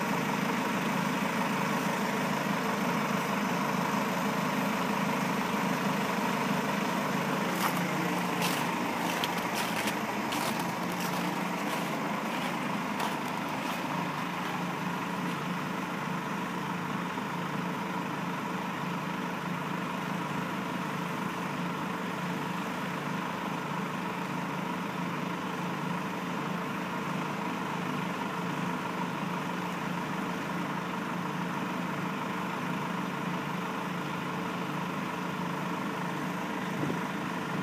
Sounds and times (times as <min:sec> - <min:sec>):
Bus: 0:00.0 - 0:37.6
Idling: 0:00.0 - 0:37.6.